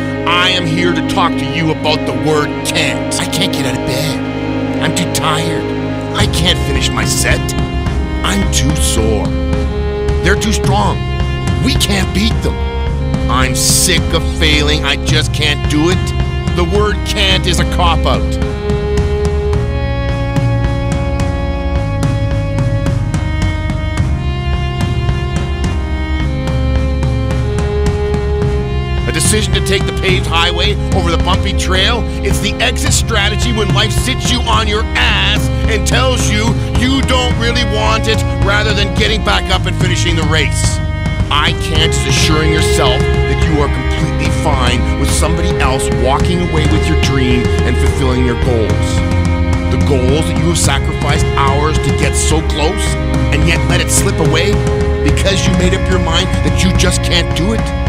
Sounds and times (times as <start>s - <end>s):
Music: 0.0s - 57.8s
Speech: 0.2s - 4.2s, 4.8s - 7.6s, 8.2s - 9.4s, 10.2s - 11.0s, 11.6s - 12.6s, 13.3s - 18.4s, 29.1s - 49.0s, 49.7s - 57.7s.